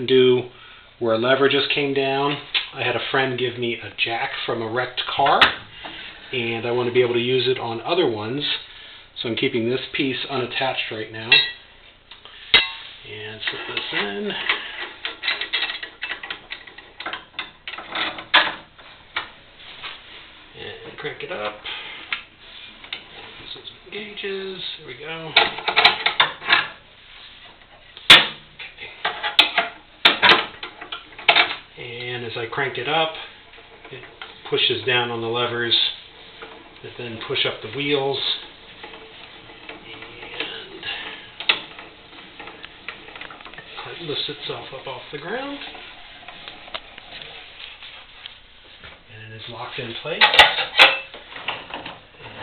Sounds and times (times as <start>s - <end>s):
Speech: 0.0s - 5.6s, 6.3s - 11.6s, 13.0s - 14.5s, 20.6s - 21.7s, 23.4s - 25.6s, 31.8s - 33.3s, 33.9s - 36.0s, 36.8s - 38.5s, 39.8s - 41.0s, 43.7s - 45.8s, 49.1s - 50.4s.